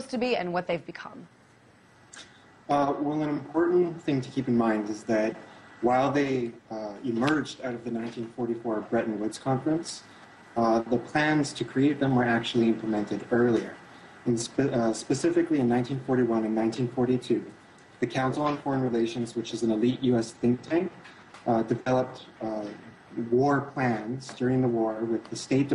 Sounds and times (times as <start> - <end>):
Speech: 0.0 - 1.3, 2.7 - 25.7.